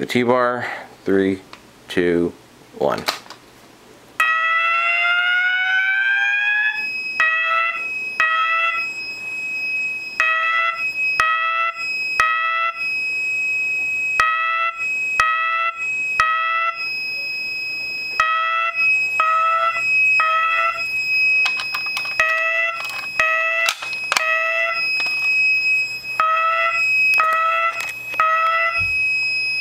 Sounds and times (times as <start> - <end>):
Fire alarm: 4.2 - 29.6.